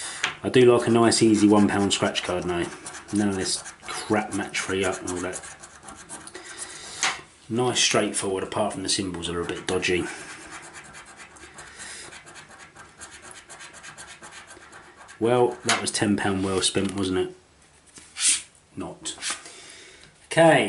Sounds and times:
Inside, small room: 0.0s - 20.6s
Speech: 0.4s - 5.4s, 7.5s - 10.2s, 15.2s - 17.4s, 18.8s - 19.2s, 20.3s - 20.6s.

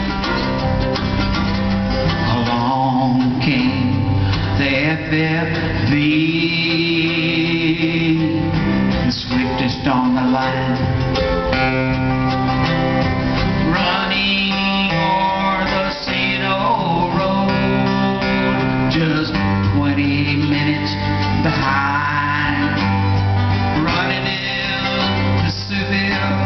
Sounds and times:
Music: 0.0s - 26.4s.

